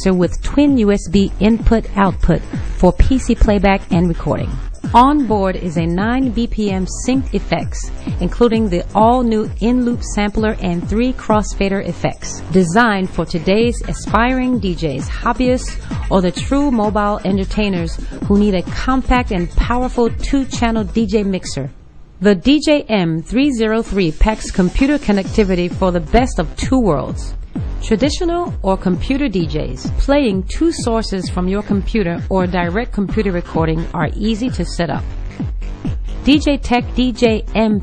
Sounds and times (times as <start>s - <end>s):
Speech: 0.0s - 35.0s, 36.2s - 37.8s.